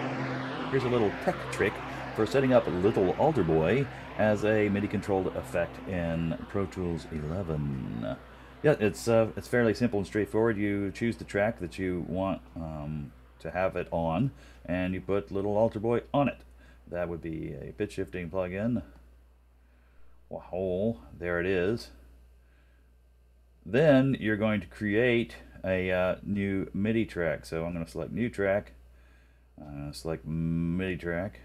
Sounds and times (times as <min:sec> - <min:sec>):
Speech: 0:00.6 - 0:19.0, 0:20.3 - 0:22.0, 0:23.6 - 0:28.8, 0:29.6 - 0:31.4.